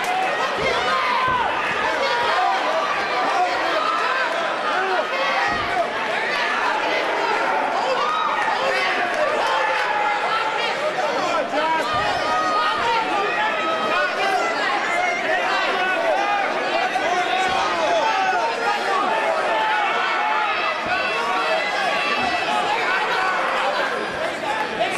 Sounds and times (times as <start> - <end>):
Speech: 0.0 - 24.9.